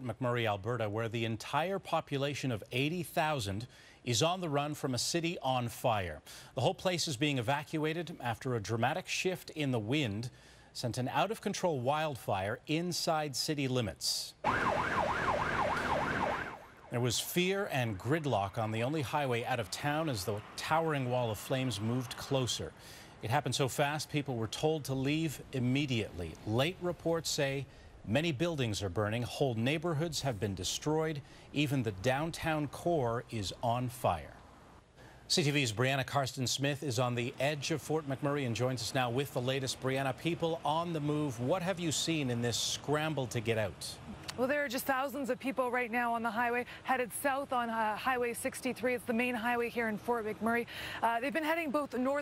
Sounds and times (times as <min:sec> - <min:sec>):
Speech: 0:00.0 - 0:14.4, 0:16.9 - 0:34.4, 0:35.3 - 0:52.2.